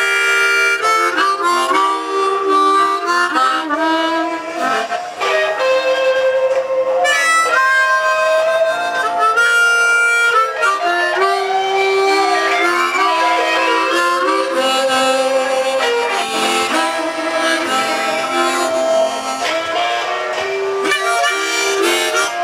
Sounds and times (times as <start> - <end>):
Harmonica: 0.0 - 22.4
Wind instrument, woodwind instrument: 0.0 - 22.4.